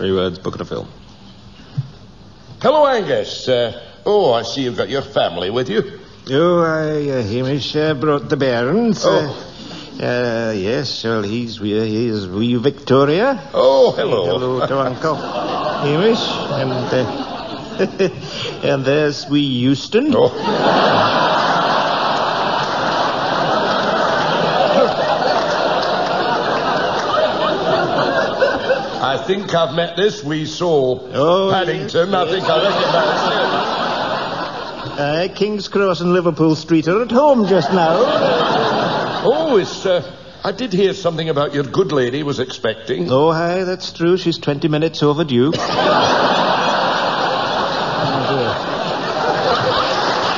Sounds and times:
Speech: 0.0 - 1.0, 2.6 - 15.2, 15.8 - 17.2, 18.6 - 20.4, 29.0 - 33.5, 35.0 - 38.2, 39.2 - 45.6.

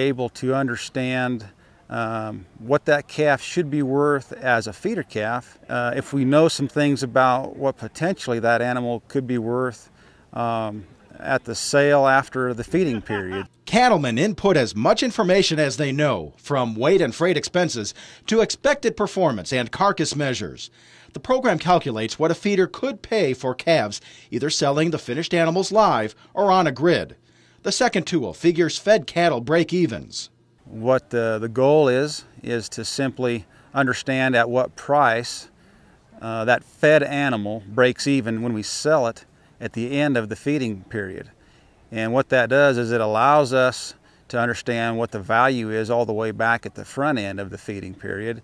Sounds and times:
Speech: 0.0 - 35.5, 36.2 - 48.4.

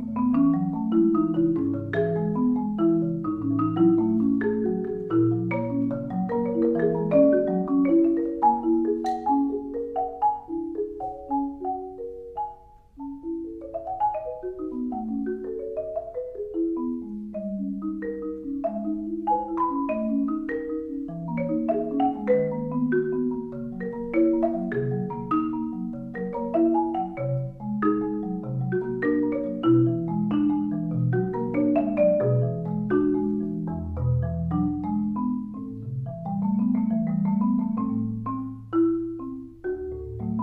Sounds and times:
Marimba, xylophone: 0.0 - 40.4.

